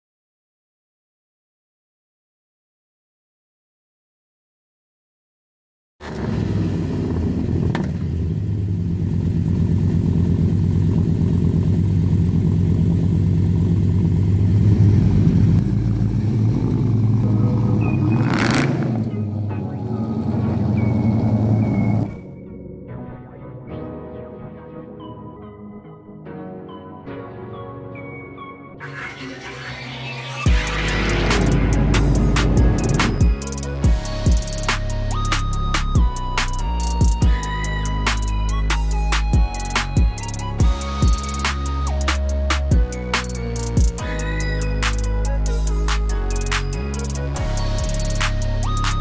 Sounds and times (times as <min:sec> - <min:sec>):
Car: 0:06.0 - 0:22.3, 0:28.9 - 0:36.6, 0:43.8 - 0:49.0
Outside, urban or manmade: 0:06.0 - 0:49.0.